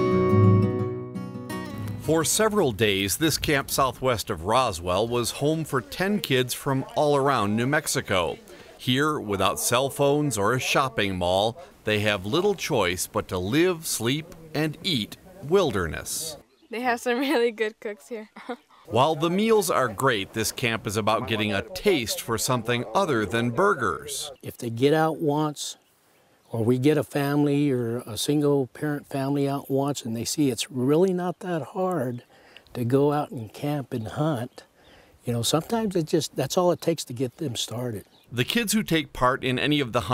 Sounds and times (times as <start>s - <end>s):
Speech: 2.0s - 25.8s, 26.5s - 40.1s.